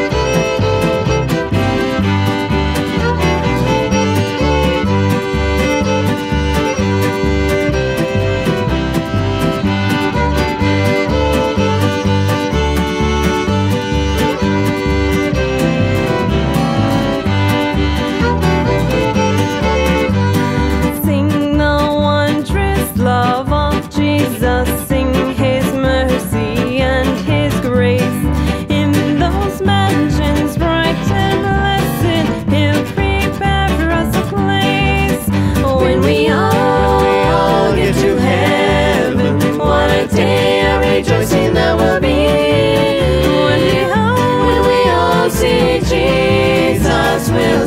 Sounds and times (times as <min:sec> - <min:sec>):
Country: 0:00.0 - 0:47.6.